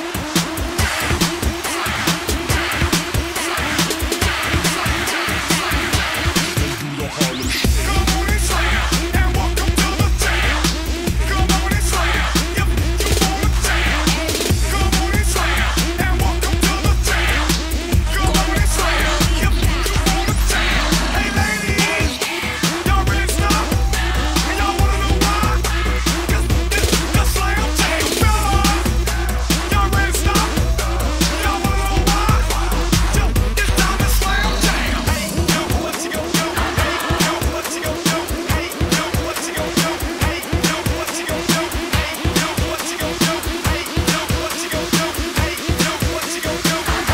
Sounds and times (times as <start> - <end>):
Music: 0.0 - 47.1.